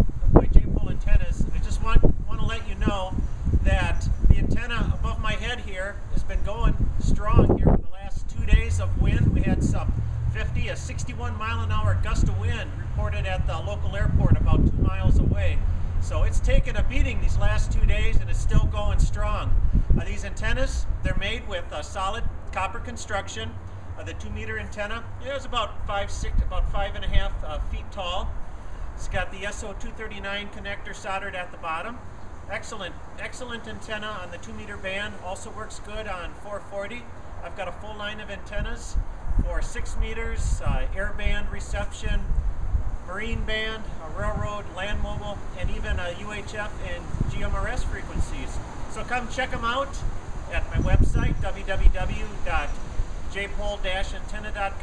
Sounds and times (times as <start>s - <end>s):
Speech: 0.4s - 28.3s, 29.0s - 42.3s, 43.1s - 54.8s.